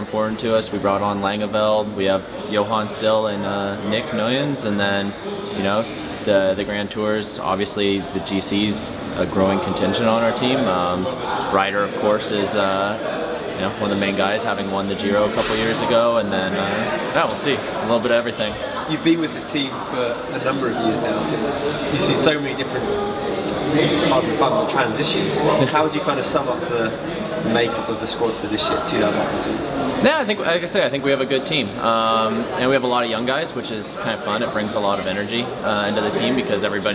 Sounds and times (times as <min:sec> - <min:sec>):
Speech: 0:00.0 - 0:36.9.